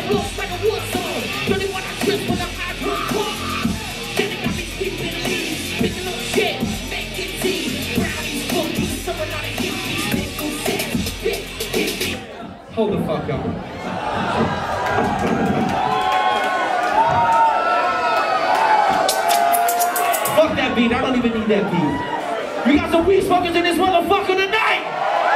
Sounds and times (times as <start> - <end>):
Music: 0.0 - 12.3, 19.0 - 20.6
Speech: 12.3 - 13.6, 20.3 - 24.8.